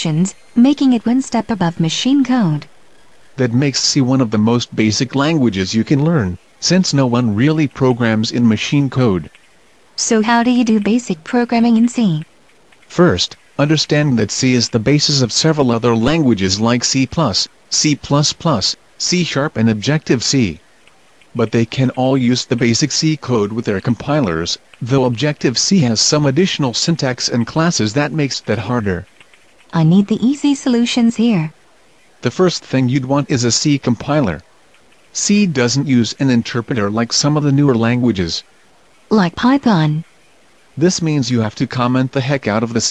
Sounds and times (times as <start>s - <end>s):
Speech: 0.0s - 2.7s, 3.4s - 9.3s, 10.0s - 12.2s, 12.9s - 20.6s, 21.4s - 29.1s, 29.7s - 31.5s, 32.2s - 34.4s, 35.2s - 38.4s, 39.1s - 40.0s, 40.8s - 42.9s.